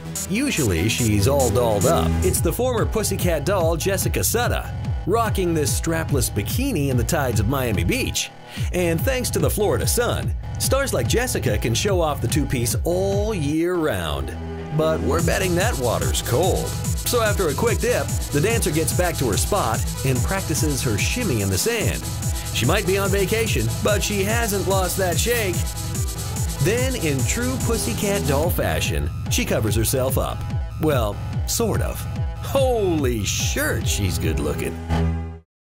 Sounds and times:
Music: 0.0s - 35.5s
Speech: 0.2s - 22.0s, 22.6s - 25.6s, 26.6s - 34.8s.

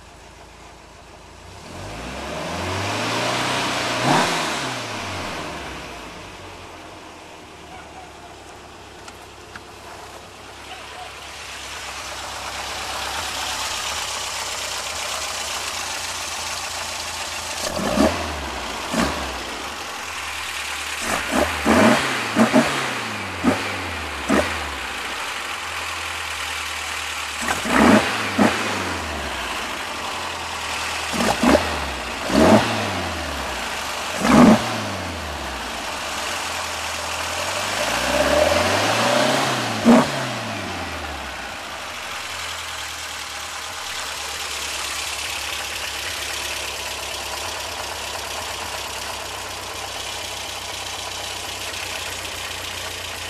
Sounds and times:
Medium engine (mid frequency): 0.0s - 53.3s
Vehicle: 0.0s - 53.3s
Accelerating, revving, vroom: 1.5s - 6.0s, 17.6s - 19.6s, 21.0s - 24.9s, 27.4s - 29.4s, 31.1s - 35.6s, 37.2s - 41.4s.

